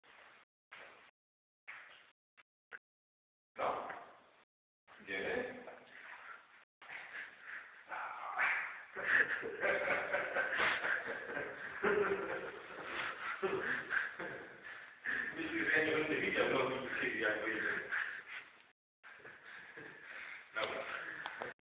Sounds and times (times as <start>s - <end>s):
Speech: 3.6s - 4.0s, 5.0s - 5.8s, 15.3s - 18.0s, 20.6s - 21.0s.